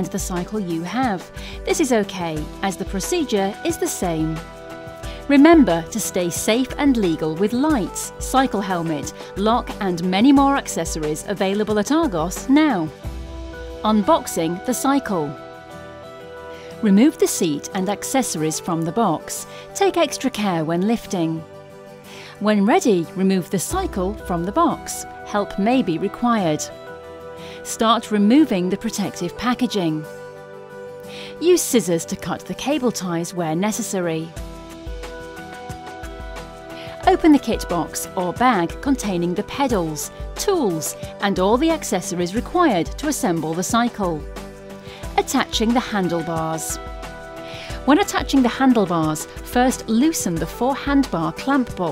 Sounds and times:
Speech: 0.0 - 4.4, 5.3 - 13.0, 13.8 - 15.4, 16.8 - 21.4, 22.4 - 26.7, 27.6 - 30.0, 31.4 - 34.3, 36.9 - 44.2, 45.2 - 46.8, 47.8 - 51.9
Music: 0.0 - 51.9.

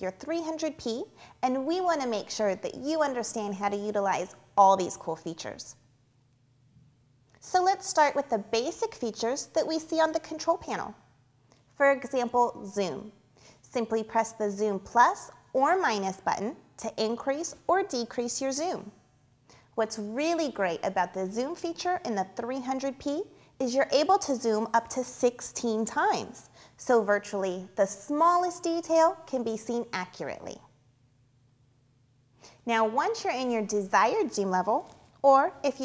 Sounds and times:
Speech: 0.0 - 5.8, 7.4 - 11.0, 11.8 - 19.0, 19.8 - 30.7, 32.6 - 35.8.

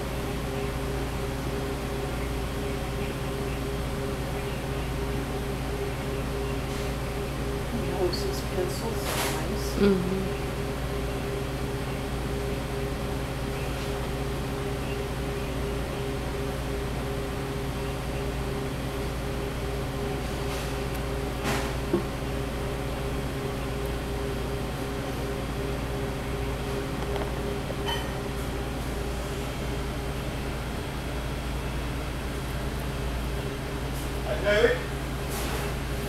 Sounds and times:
Speech: 7.8 - 10.4, 34.3 - 34.9.

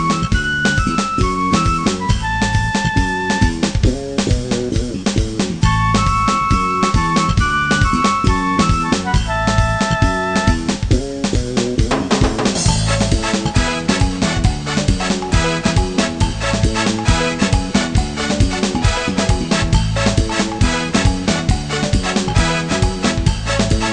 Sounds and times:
Video game music: 5.7 - 10.9, 11.8 - 23.9.

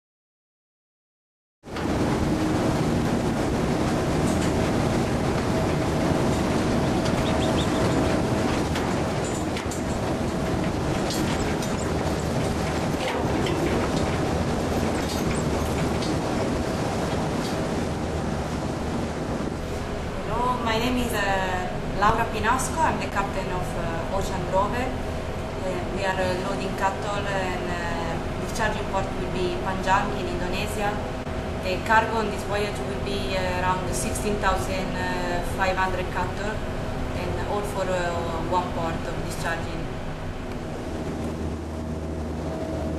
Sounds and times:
Speech: 20.2 - 25.0, 25.6 - 31.0, 31.6 - 36.6, 37.2 - 39.9.

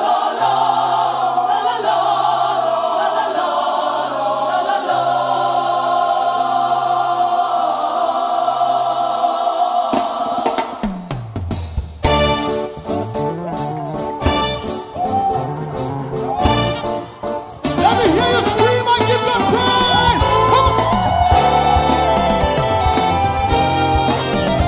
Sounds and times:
Gospel music: 0.0 - 24.6
Exciting music: 9.9 - 24.6.

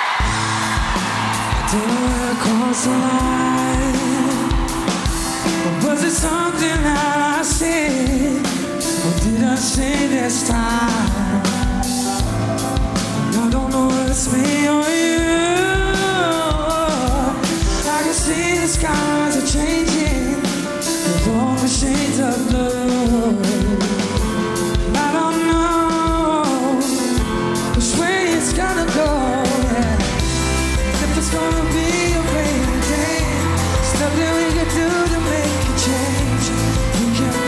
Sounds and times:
Music: 0.0 - 37.4.

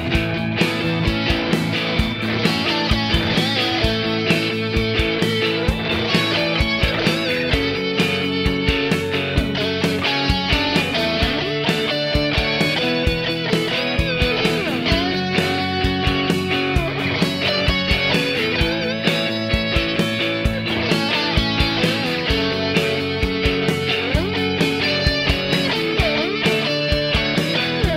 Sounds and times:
Electric guitar: 0.0 - 27.9.

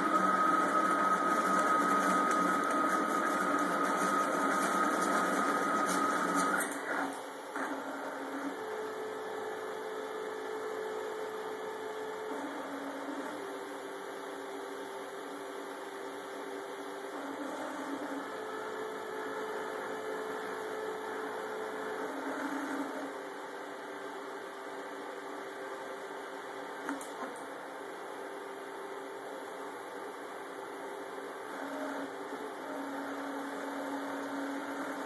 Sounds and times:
Printer: 0.0 - 35.0.

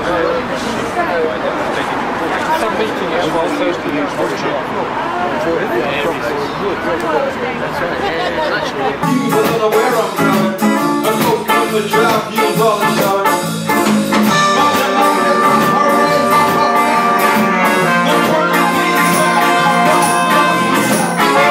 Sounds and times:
Speech: 0.0 - 10.6
Music: 9.0 - 21.5.

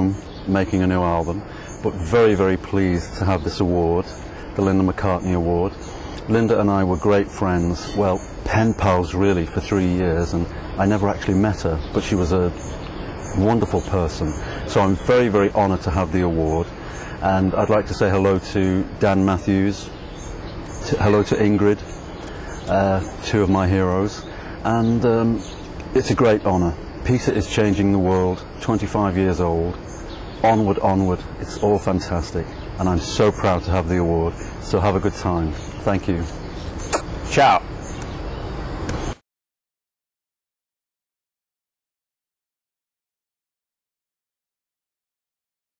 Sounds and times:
Male speech, man speaking: 0.0 - 12.7, 13.3 - 19.9, 20.8 - 21.9, 22.7 - 29.8, 30.4 - 36.4, 37.3 - 37.7
Narration, monologue: 0.0 - 39.2.

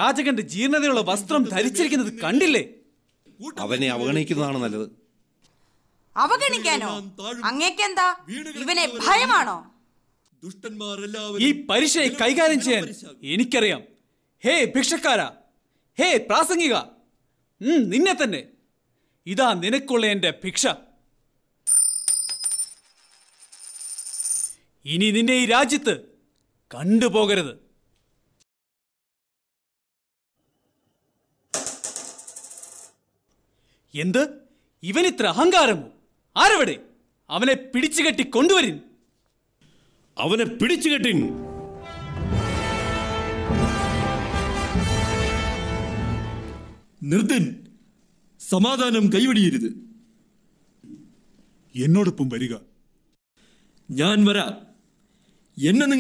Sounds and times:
Speech: 10.4 - 15.4, 26.7 - 27.6, 40.2 - 41.3, 47.0 - 47.7, 48.4 - 49.9, 51.7 - 52.7, 53.9 - 54.8, 55.6 - 56.0.

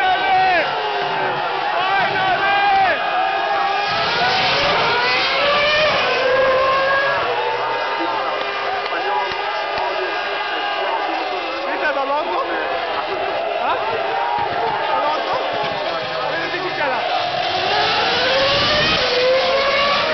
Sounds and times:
Speech: 7.9 - 17.2.

